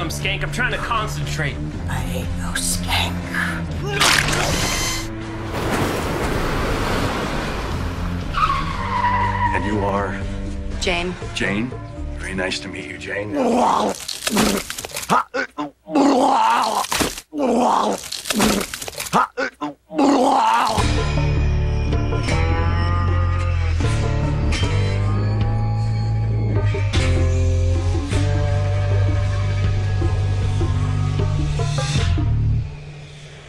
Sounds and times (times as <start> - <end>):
Music: 0.0 - 5.8, 7.8 - 13.6, 20.7 - 33.4.